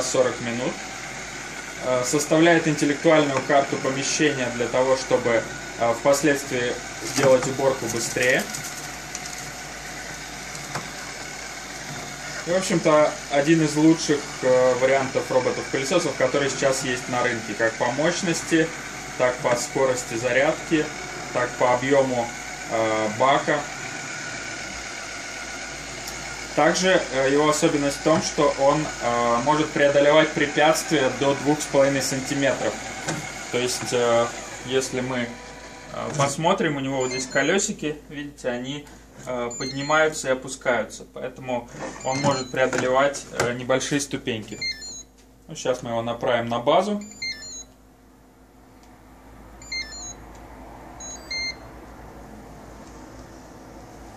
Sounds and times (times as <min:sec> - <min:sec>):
Speech: 0:00.0 - 0:00.8, 0:01.8 - 0:08.5, 0:12.4 - 0:23.7, 0:26.6 - 0:32.8, 0:33.5 - 0:44.7, 0:45.5 - 0:47.1.